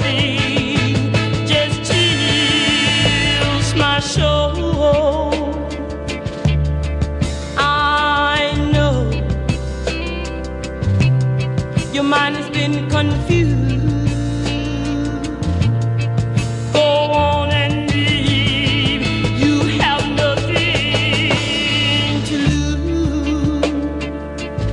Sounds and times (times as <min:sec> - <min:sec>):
Jingle (music): 0:00.0 - 0:24.7.